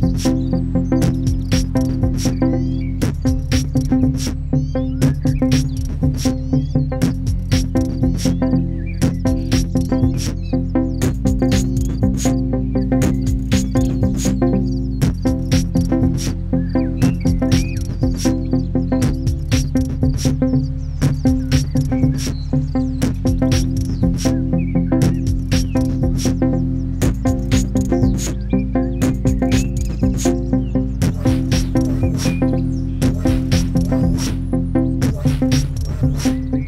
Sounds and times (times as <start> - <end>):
Bird: 0.0 - 36.6
Music: 0.0 - 36.6.